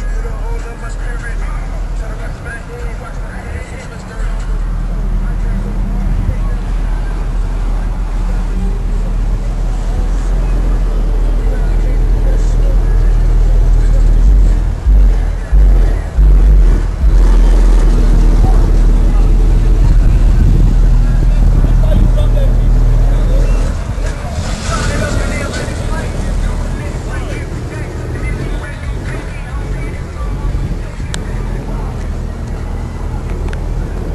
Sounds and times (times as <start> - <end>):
Car: 0.0 - 34.1.